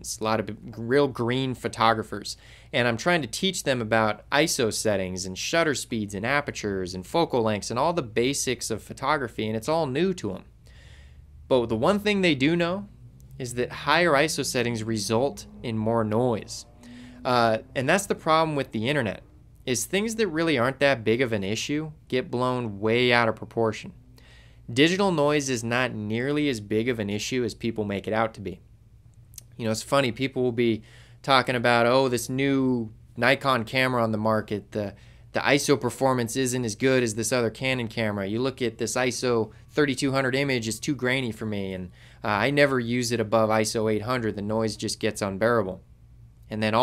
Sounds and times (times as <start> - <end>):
Speech: 0.0 - 10.5, 11.5 - 24.0, 24.7 - 28.6, 29.4 - 45.8, 46.5 - 46.8.